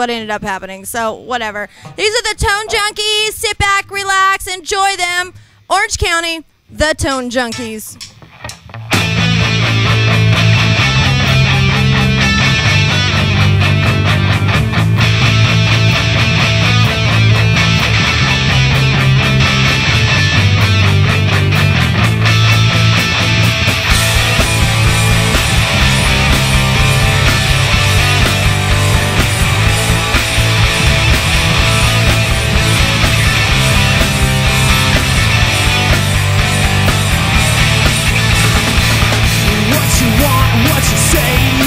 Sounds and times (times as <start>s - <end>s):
Speech: 0.0s - 8.0s
Heavy metal: 8.9s - 41.6s.